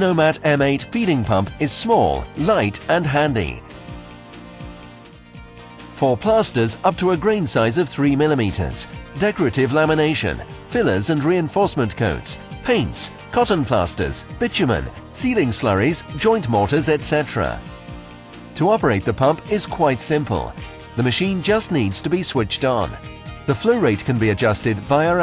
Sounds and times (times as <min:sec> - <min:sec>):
Speech: 0:00.0 - 0:03.6, 0:06.0 - 0:17.6, 0:18.6 - 0:25.2
Music: 0:00.0 - 0:25.2.